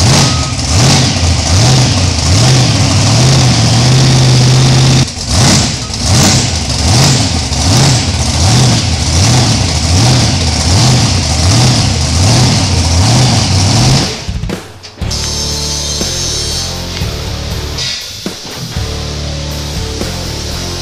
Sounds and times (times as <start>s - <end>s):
Vehicle: 0.0s - 20.8s
Music: 14.1s - 20.8s.